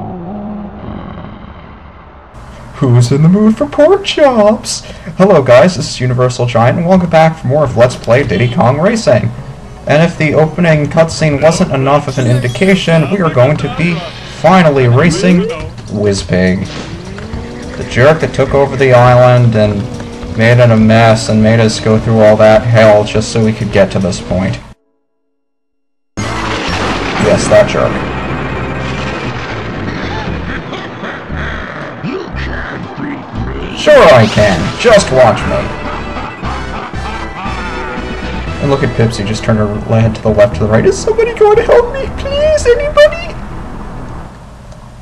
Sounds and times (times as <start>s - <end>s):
Speech: 2.8s - 9.3s, 9.9s - 16.7s, 17.8s - 19.8s, 20.4s - 24.6s, 27.2s - 28.0s, 32.0s - 35.8s, 38.6s - 43.4s
Music: 8.0s - 25.1s, 26.2s - 30.7s, 33.4s - 42.2s.